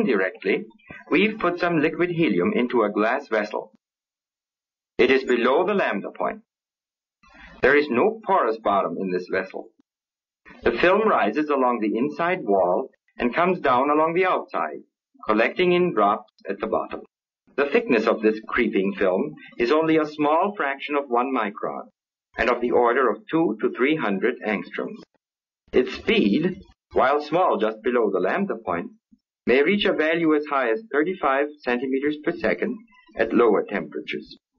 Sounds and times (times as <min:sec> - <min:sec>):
Speech: 0:00.0 - 0:03.8, 0:05.0 - 0:06.5, 0:07.5 - 0:09.8, 0:10.6 - 0:34.5.